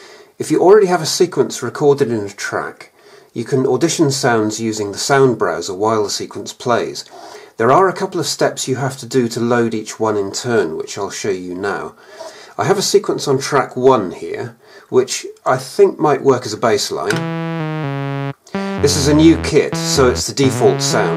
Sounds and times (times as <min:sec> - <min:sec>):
Speech: 0:00.0 - 0:17.2, 0:18.6 - 0:21.1.